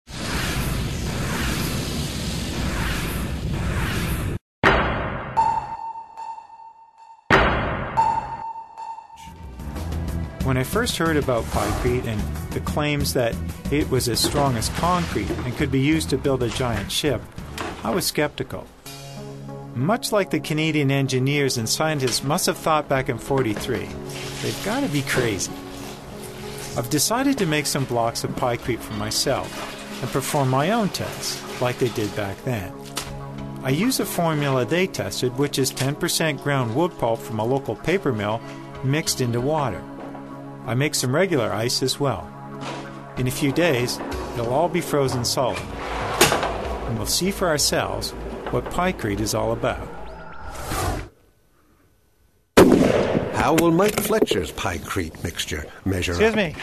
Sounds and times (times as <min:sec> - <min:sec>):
Music: 0:08.0 - 0:49.9.